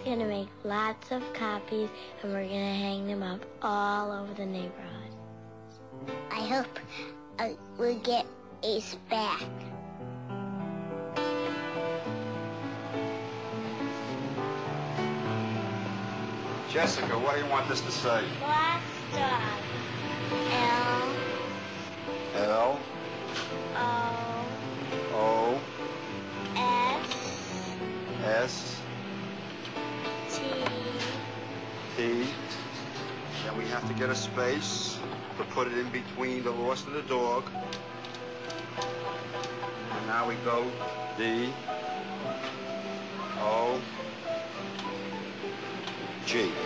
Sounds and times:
Music: 0.0 - 46.6.

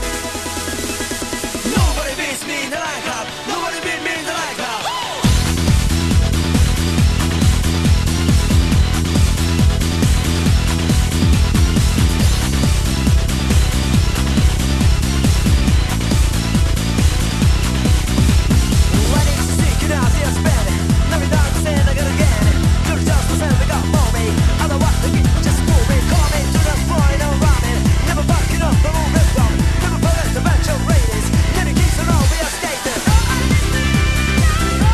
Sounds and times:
Techno: 0.0 - 34.9.

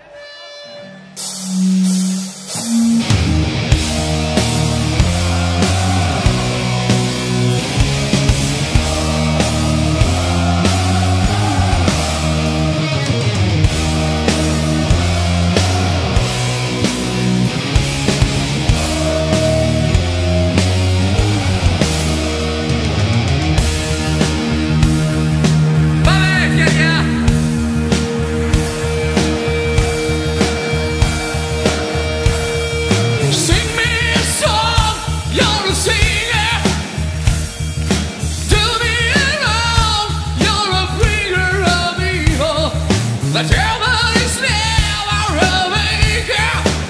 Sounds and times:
Rock and roll: 0.0 - 46.8.

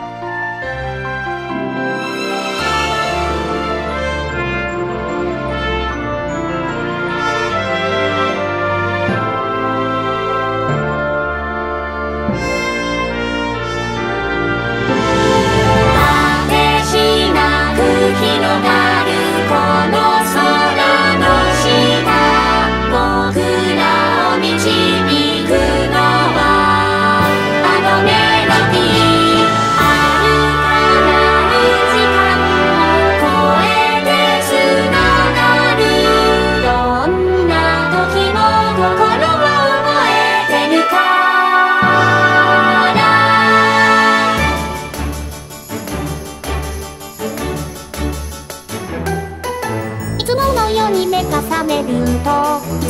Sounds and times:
Music: 0.0 - 52.8.

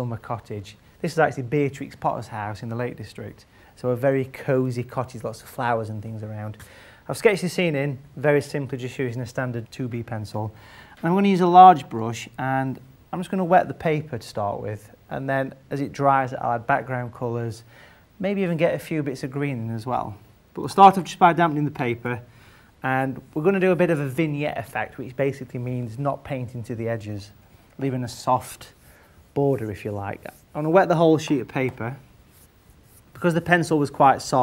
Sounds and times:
Speech: 0.0 - 28.8, 29.4 - 32.1, 33.1 - 34.4.

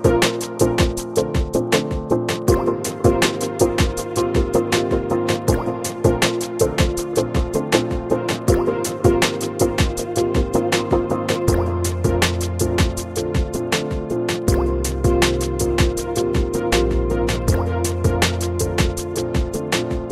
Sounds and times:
Music: 0.0 - 20.1.

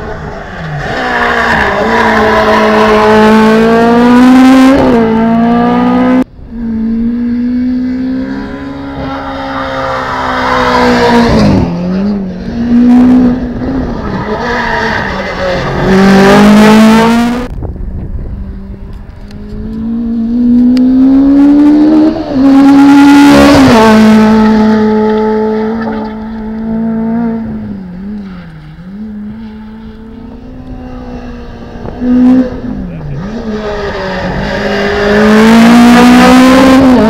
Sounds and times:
Skidding: 0.0 - 37.0.

